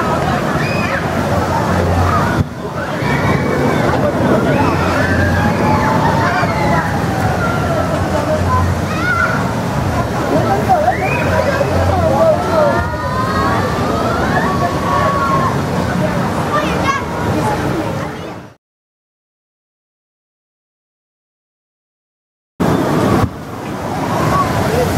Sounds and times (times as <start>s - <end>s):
Speech: 0.0s - 18.6s, 24.0s - 24.9s
Water: 0.0s - 18.6s, 22.6s - 24.9s.